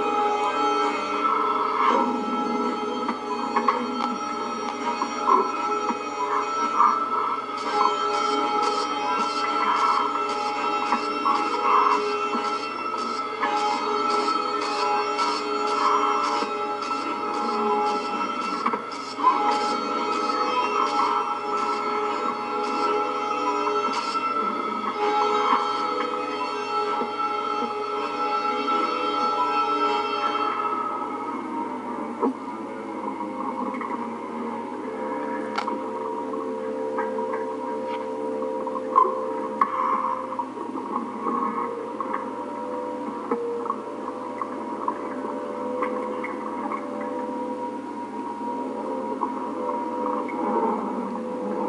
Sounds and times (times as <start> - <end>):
Music: 0.0 - 51.6.